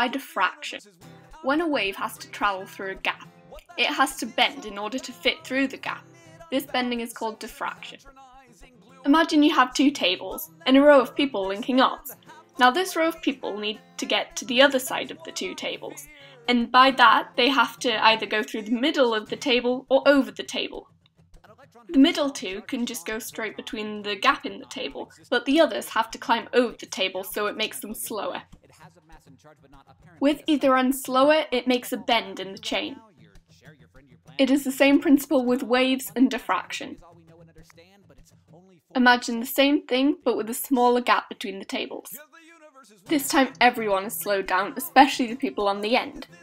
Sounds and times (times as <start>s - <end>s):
Speech: 0.0s - 0.9s, 1.5s - 8.1s, 9.1s - 20.8s, 21.9s - 28.4s, 30.2s - 33.0s, 34.4s - 37.0s, 39.0s - 42.2s, 43.1s - 46.4s
Music: 0.0s - 46.4s.